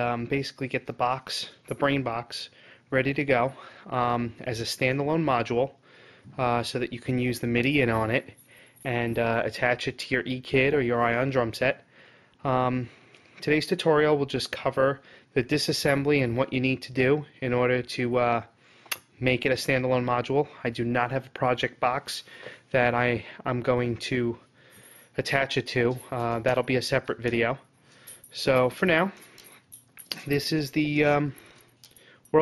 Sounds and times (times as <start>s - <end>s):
Speech: 0.0s - 5.8s, 6.4s - 11.8s, 12.4s - 18.5s, 19.2s - 24.4s, 25.2s - 27.6s, 28.4s - 29.2s, 30.1s - 31.4s.